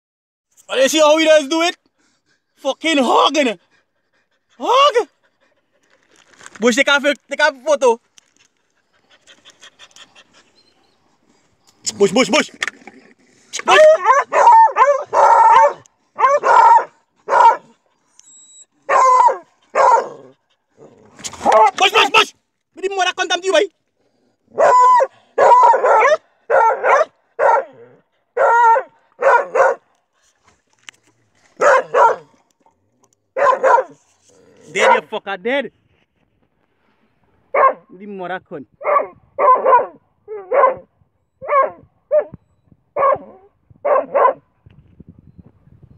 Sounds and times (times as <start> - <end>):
Speech: 0.7 - 1.8, 2.6 - 3.6, 4.6 - 5.2, 6.6 - 8.0, 11.8 - 12.6, 21.6 - 23.8, 34.7 - 35.8, 37.9 - 38.7
Pant: 1.8 - 2.6, 3.6 - 6.3, 8.5 - 11.7, 19.5 - 21.0.